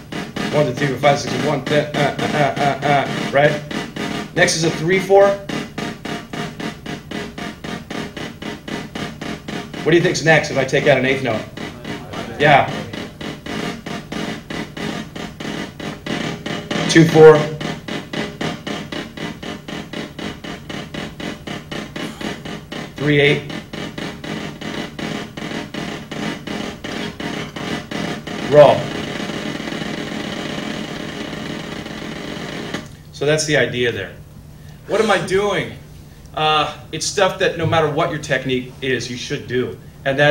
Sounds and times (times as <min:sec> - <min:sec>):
Drum roll: 0:00.0 - 0:34.3, 0:34.9 - 0:40.3.